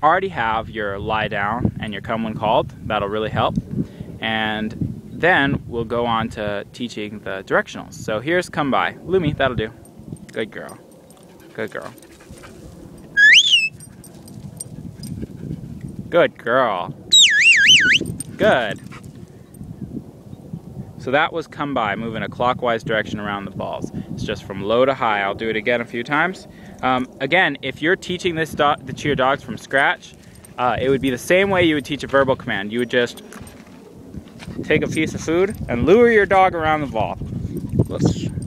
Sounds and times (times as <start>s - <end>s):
Speech: 0.0s - 3.6s, 4.2s - 10.8s, 11.6s - 12.0s, 16.1s - 17.0s, 18.4s - 18.8s, 21.0s - 33.2s, 34.6s - 37.2s, 37.9s - 38.3s.